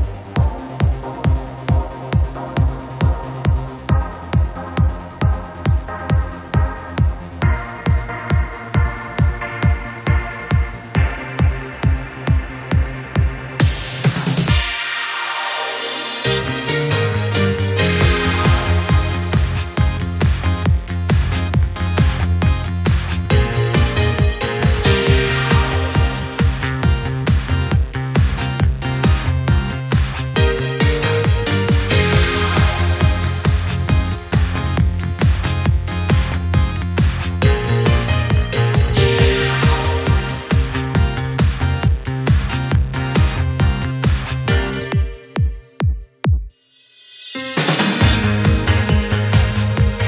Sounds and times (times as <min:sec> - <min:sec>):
Music: 0:00.0 - 0:50.0.